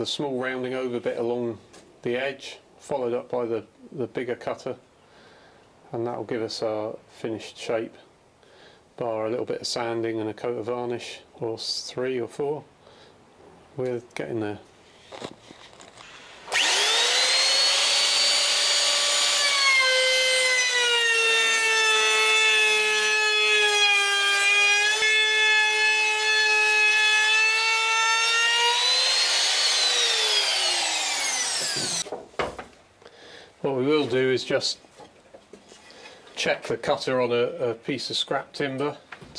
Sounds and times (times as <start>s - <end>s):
Speech: 0.0s - 4.8s, 5.9s - 8.1s, 9.0s - 12.7s, 13.8s - 14.7s, 33.6s - 34.9s, 36.4s - 39.3s.